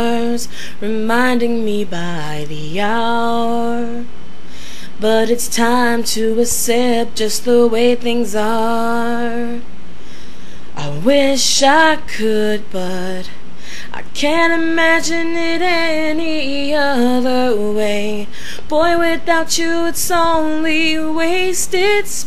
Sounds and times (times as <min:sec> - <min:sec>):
Female singing: 0:00.0 - 0:04.1, 0:05.0 - 0:09.6, 0:10.8 - 0:22.2.